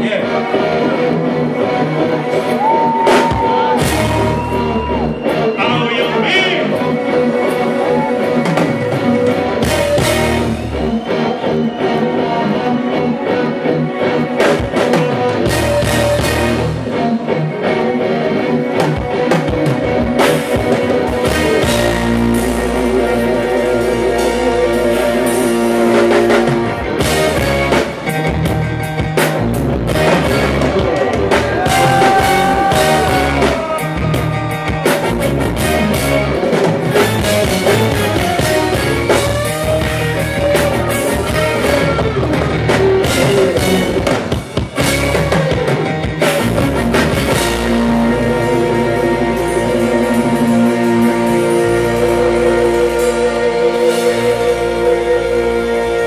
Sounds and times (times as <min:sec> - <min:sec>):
Music: 0:00.0 - 0:56.0.